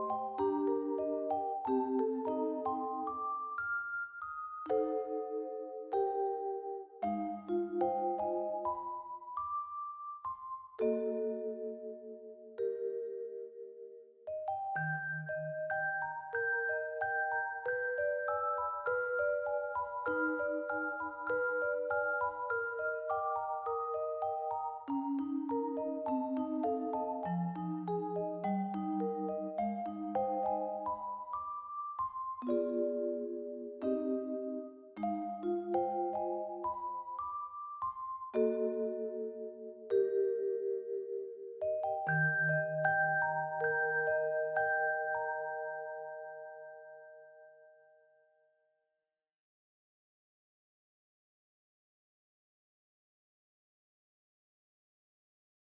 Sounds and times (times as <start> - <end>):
Music: 0.0 - 48.8.